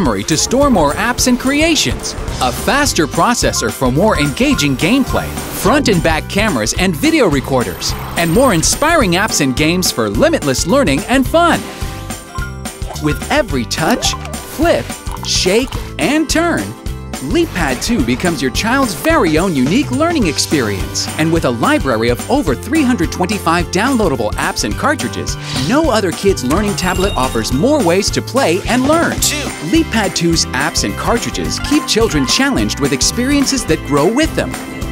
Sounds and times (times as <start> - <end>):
Speech: 0.0 - 11.7, 13.0 - 34.6
Music: 0.0 - 34.9.